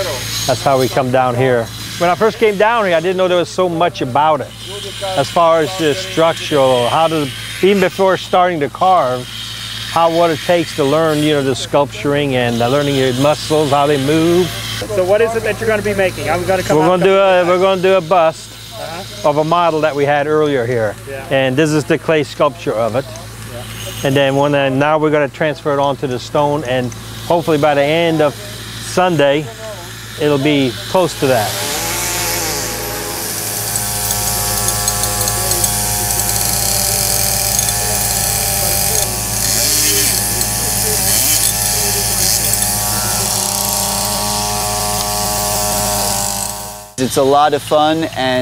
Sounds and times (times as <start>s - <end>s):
Speech: 0.0s - 9.3s, 10.0s - 31.6s, 37.6s - 43.4s, 47.0s - 48.4s
Power tool: 0.0s - 48.4s.